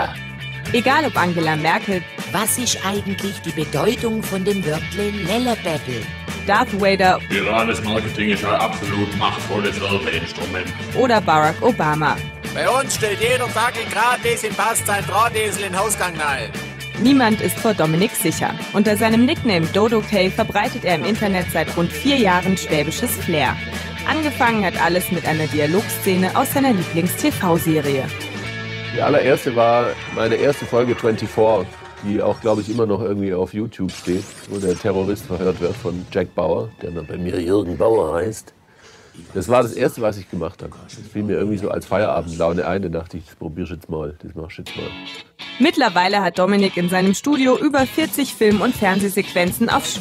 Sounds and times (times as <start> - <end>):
Speech: 0.0 - 28.1, 29.0 - 38.5, 39.2 - 45.0, 45.6 - 50.0
Music: 0.0 - 50.0.